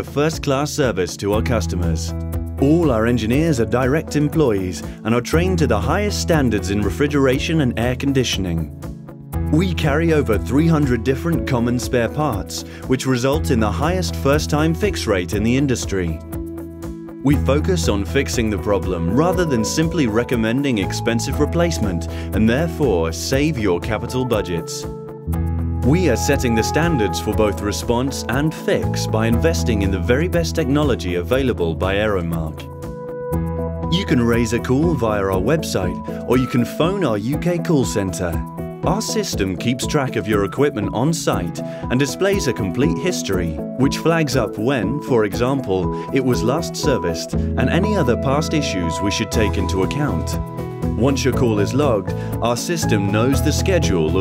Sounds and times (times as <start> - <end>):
Speech: 0.0 - 8.7, 9.5 - 16.2, 17.2 - 24.9, 25.9 - 32.7, 33.9 - 50.4, 51.0 - 54.2
Music: 0.0 - 54.2.